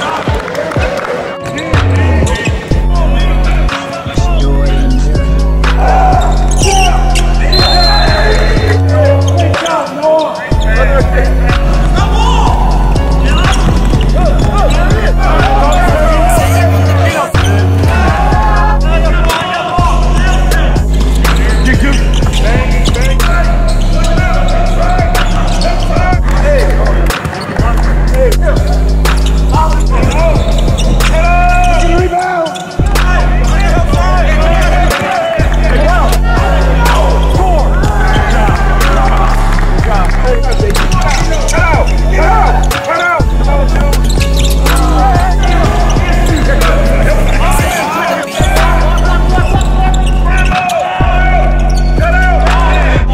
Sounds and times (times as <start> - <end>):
Speech: 0.0 - 5.2, 5.8 - 28.9, 29.5 - 53.1
Hubbub, speech noise, speech babble: 0.0 - 53.1
Music: 0.0 - 53.1.